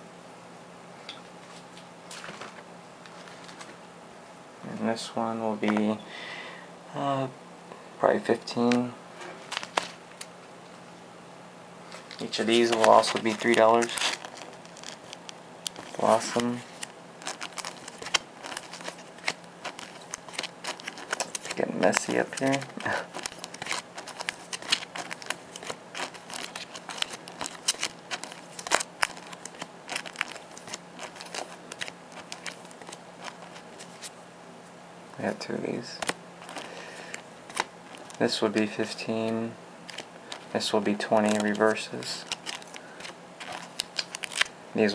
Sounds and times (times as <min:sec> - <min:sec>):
Speech: 0:04.6 - 0:06.0, 0:06.9 - 0:07.4, 0:08.0 - 0:09.0, 0:12.2 - 0:14.1, 0:16.0 - 0:16.7, 0:21.6 - 0:23.0, 0:35.2 - 0:36.0, 0:38.2 - 0:39.6, 0:40.5 - 0:42.3.